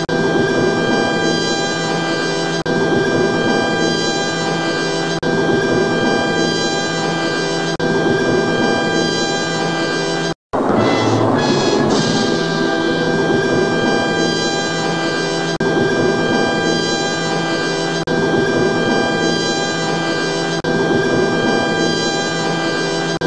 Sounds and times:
Music: 0.0s - 23.2s.

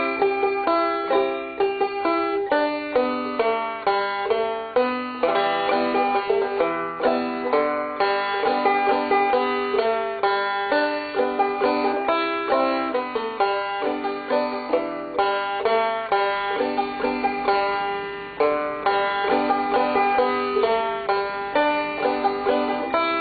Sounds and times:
Banjo: 0.0s - 23.2s.

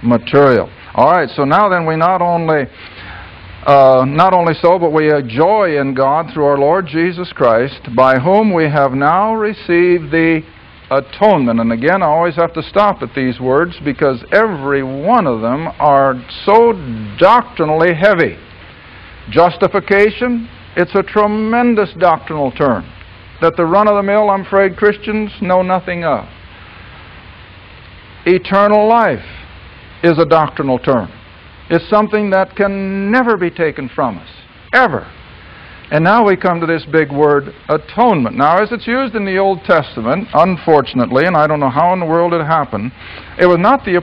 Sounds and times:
Speech: 0.0s - 2.7s, 3.6s - 18.4s, 19.3s - 26.3s, 28.2s - 29.3s, 30.0s - 35.2s, 35.9s - 44.0s
White noise: 0.0s - 44.0s.

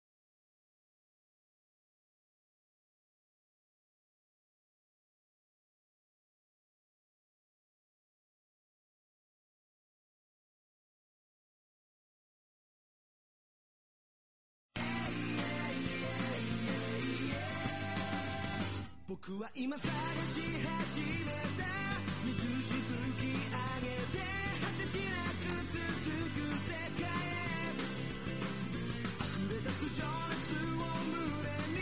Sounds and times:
Music: 14.8s - 19.0s, 19.8s - 31.8s.

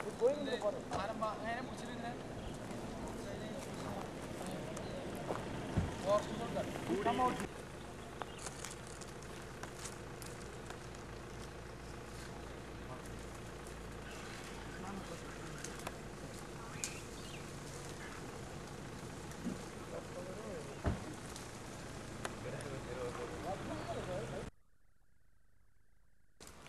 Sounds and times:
Outside, rural or natural: 0.0s - 26.6s
Speech: 22.4s - 24.5s.

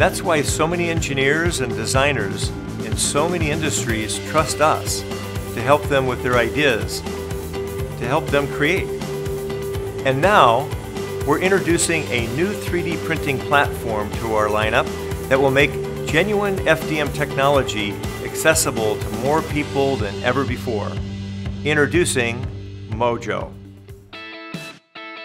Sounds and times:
Speech: 0.0s - 5.0s, 5.6s - 7.0s, 8.0s - 8.9s, 10.0s - 10.7s, 11.3s - 21.0s, 21.6s - 23.6s
Music: 0.0s - 25.2s.

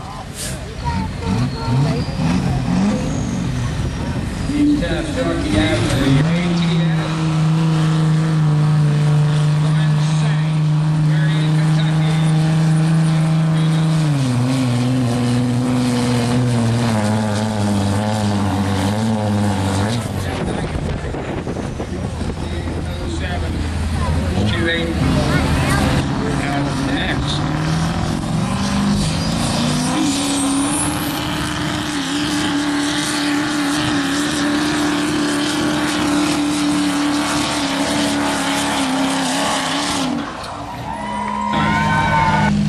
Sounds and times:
Truck: 0.0s - 42.6s.

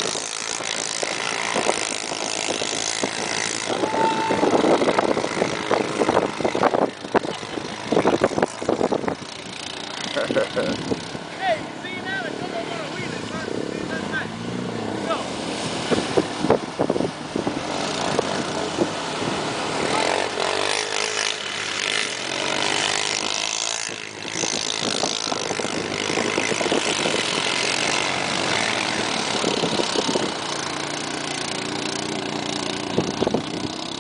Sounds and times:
Vehicle: 0.0s - 34.0s.

